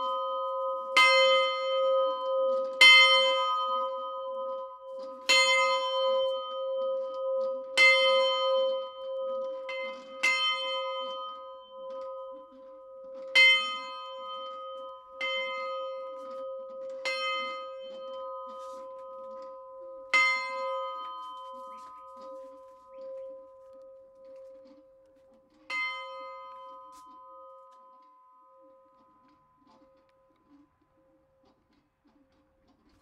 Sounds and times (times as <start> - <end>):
Bell: 0.0 - 31.9.